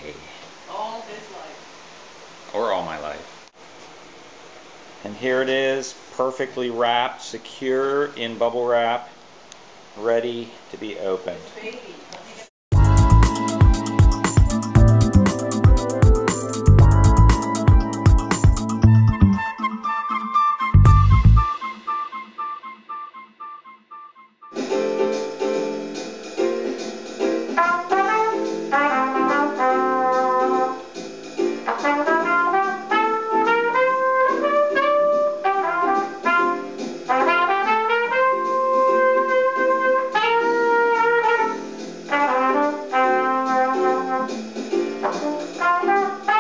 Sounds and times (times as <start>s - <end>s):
Musical instrument: 12.7s - 46.4s.